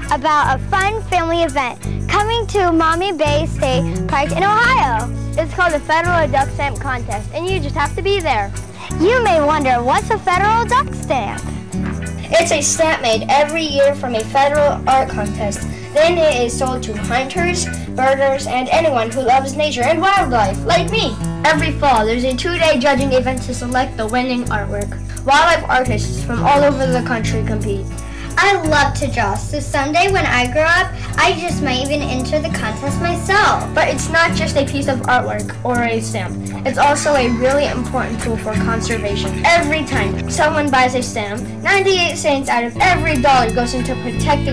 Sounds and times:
Speech: 0:00.0 - 0:11.4, 0:12.3 - 0:44.5
Music: 0:00.0 - 0:44.5.

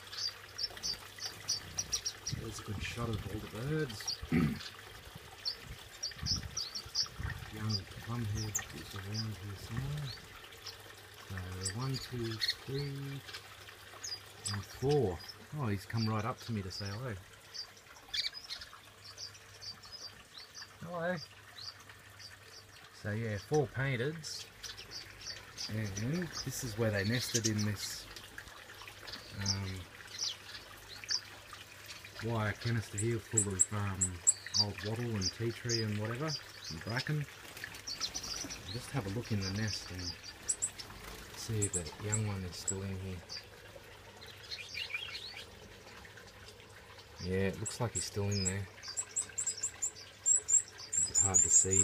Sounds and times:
Bird: 0:00.0 - 0:28.2, 0:29.0 - 0:46.0, 0:46.9 - 0:51.8
Speech: 0:02.3 - 0:04.6, 0:07.5 - 0:10.2, 0:11.3 - 0:13.3, 0:14.5 - 0:17.2, 0:20.8 - 0:21.3, 0:23.0 - 0:24.5, 0:25.6 - 0:28.1, 0:29.3 - 0:29.9, 0:32.2 - 0:37.3, 0:38.7 - 0:40.2, 0:41.4 - 0:43.3, 0:47.2 - 0:48.7, 0:51.0 - 0:51.8.

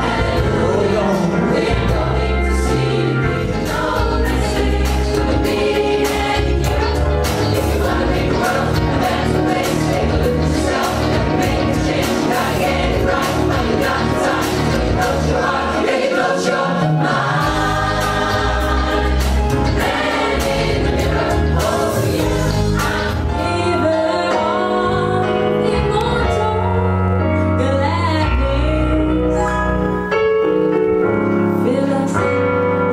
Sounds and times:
Choir: 0:00.0 - 0:26.0
Vocal music: 0:00.0 - 0:32.9.

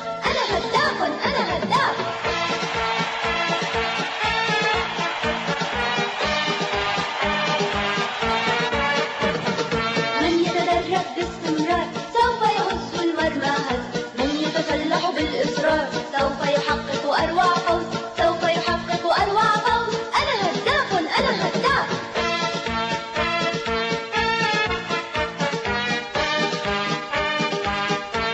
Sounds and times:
Theme music: 0:00.0 - 0:16.5, 0:21.5 - 0:28.3
Soundtrack music: 0:00.0 - 0:19.3, 0:21.6 - 0:28.3.

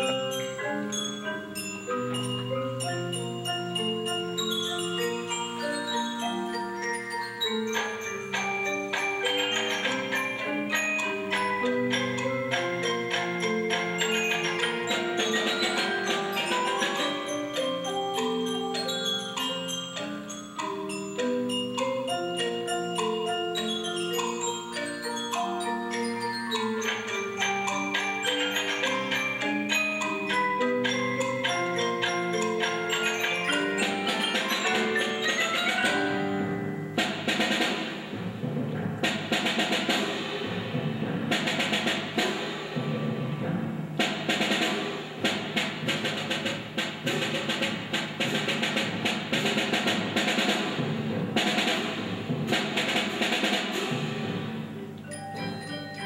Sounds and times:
Music: 0:00.0 - 0:56.0.

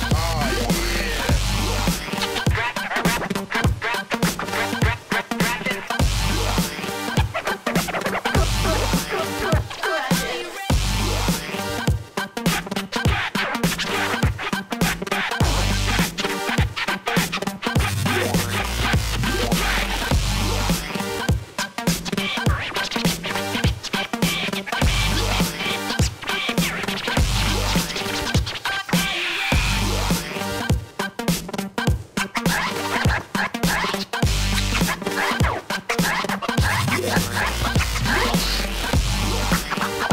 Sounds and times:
Music: 0:00.0 - 0:40.1.

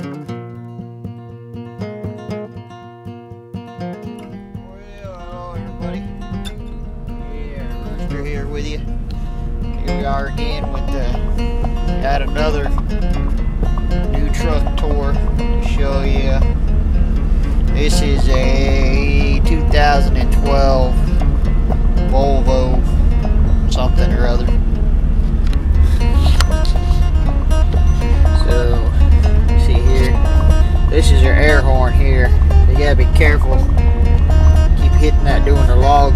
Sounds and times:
Music: 0:00.0 - 0:36.1
Speech: 0:04.6 - 0:05.8, 0:07.2 - 0:08.8, 0:09.8 - 0:11.2, 0:12.0 - 0:12.8, 0:14.1 - 0:16.5, 0:17.7 - 0:21.0, 0:22.1 - 0:22.8, 0:23.7 - 0:24.6, 0:28.4 - 0:29.0, 0:29.6 - 0:30.2, 0:30.9 - 0:33.7, 0:34.8 - 0:36.1.

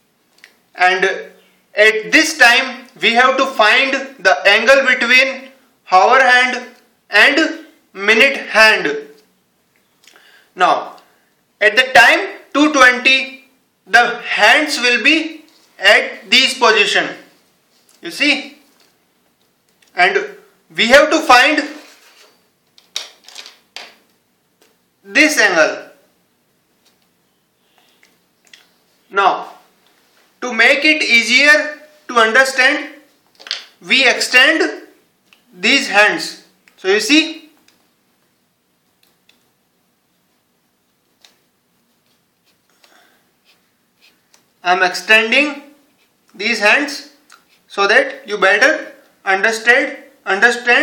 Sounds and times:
Speech: 0:00.8 - 0:09.2, 0:10.6 - 0:17.3, 0:18.0 - 0:18.7, 0:19.9 - 0:21.9, 0:25.1 - 0:26.1, 0:29.1 - 0:29.7, 0:30.4 - 0:33.1, 0:33.8 - 0:37.6, 0:44.6 - 0:50.8.

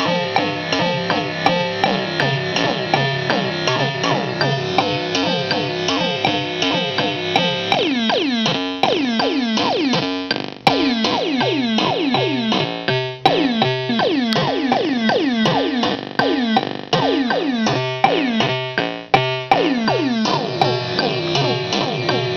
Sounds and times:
Sampler: 0:00.0 - 0:22.3.

